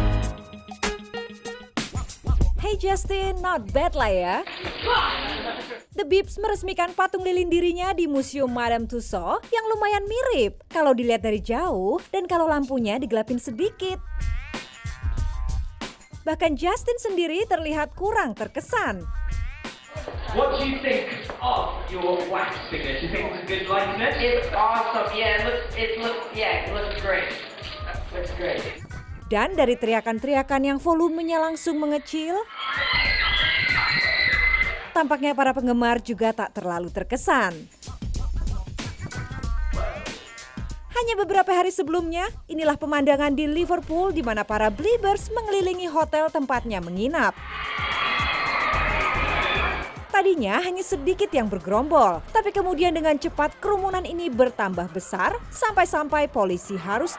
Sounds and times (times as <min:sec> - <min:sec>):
Music: 0:00.0 - 0:32.5, 0:33.1 - 0:57.1.